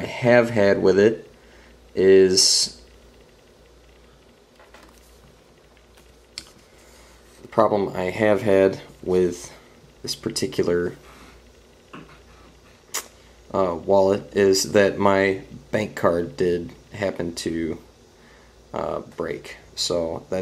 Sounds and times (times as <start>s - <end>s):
Speech: 0.0s - 1.3s, 1.9s - 2.8s, 7.5s - 11.0s, 13.5s - 17.9s, 18.7s - 20.4s
Inside, small room: 0.0s - 20.4s.